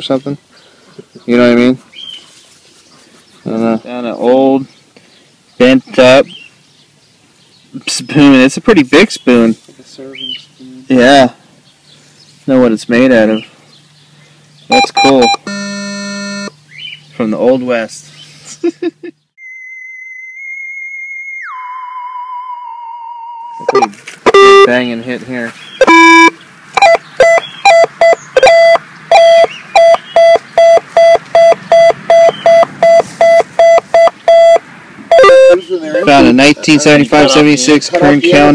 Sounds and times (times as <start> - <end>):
Speech: 0.0 - 0.4, 3.5 - 4.7, 7.8 - 11.4, 12.5 - 13.5, 17.2 - 18.1, 24.7 - 25.6, 35.5 - 38.5.